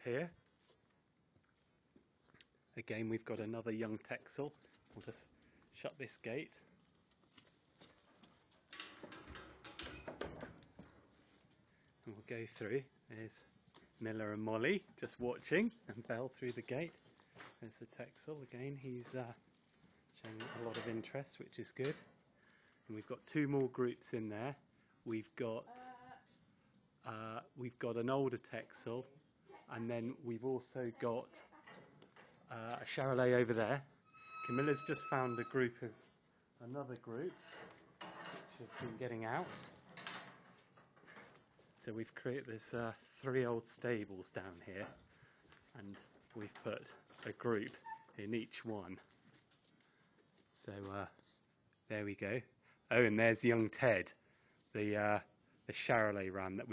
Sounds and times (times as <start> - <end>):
Speech: 0.0 - 0.4, 2.8 - 6.6, 12.0 - 17.0, 17.6 - 19.4, 20.2 - 22.0, 22.9 - 26.2, 27.0 - 31.6, 32.5 - 33.9, 34.5 - 36.0, 36.6 - 37.4, 38.5 - 39.7, 41.8 - 45.0, 45.7 - 49.0, 50.6 - 51.2, 51.9 - 54.2, 54.8 - 56.7.